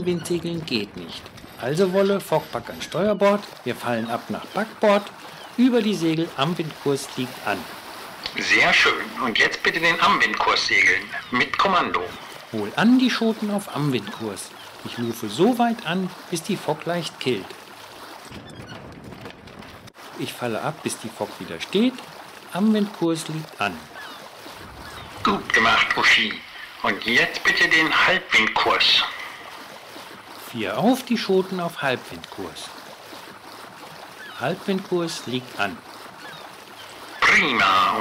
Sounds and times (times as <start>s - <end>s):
Speech: 0.0s - 7.6s, 8.3s - 17.5s, 20.2s - 23.9s, 25.3s - 29.3s, 30.4s - 32.7s, 34.4s - 35.8s, 37.2s - 38.0s.